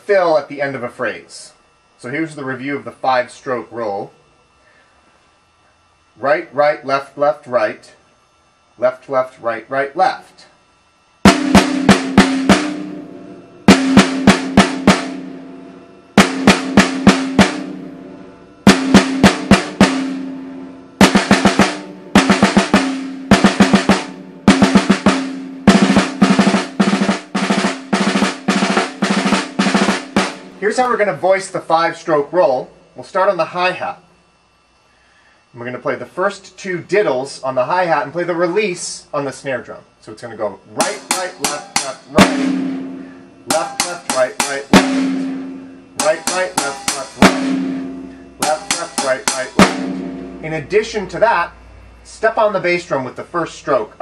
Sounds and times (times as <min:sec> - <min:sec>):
Speech: 0:00.0 - 0:04.2, 0:06.2 - 0:08.1, 0:08.8 - 0:10.6, 0:30.6 - 0:34.1, 0:35.6 - 0:42.5, 0:43.5 - 0:44.8, 0:46.0 - 0:47.2, 0:48.4 - 0:49.6, 0:50.4 - 0:54.0
Drum: 0:11.2 - 0:31.2, 0:40.8 - 0:51.3
Drum kit: 0:11.2 - 0:31.2, 0:40.8 - 0:51.2.